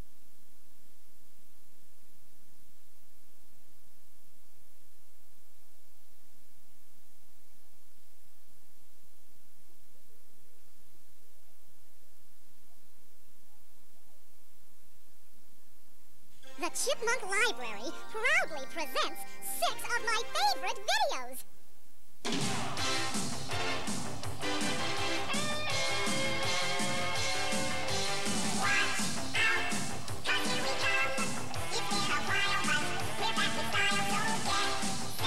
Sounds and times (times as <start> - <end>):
Music: 16.4 - 20.9, 22.3 - 35.2
Speech: 16.5 - 21.5.